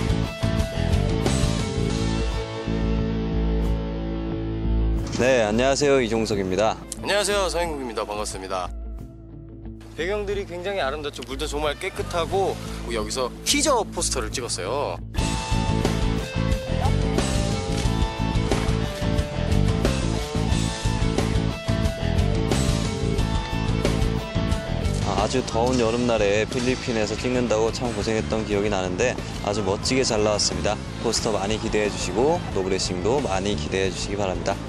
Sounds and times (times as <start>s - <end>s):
Music: 0.0s - 34.6s.